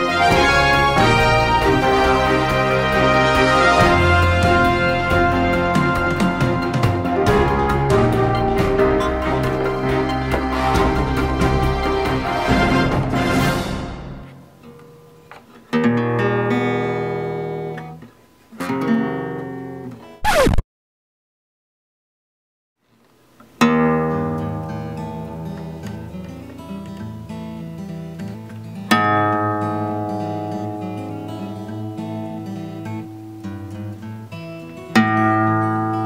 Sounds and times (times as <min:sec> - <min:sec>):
Electronic tuner: 0:00.0 - 0:13.2, 0:14.2 - 0:20.6, 0:23.4 - 0:36.0
Music: 0:00.0 - 0:20.6, 0:23.6 - 0:36.0.